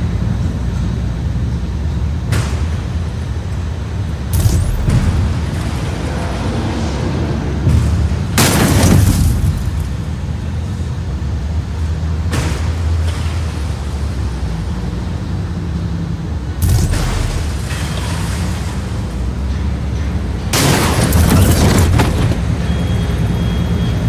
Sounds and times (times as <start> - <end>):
Boom: 4.3 - 5.6.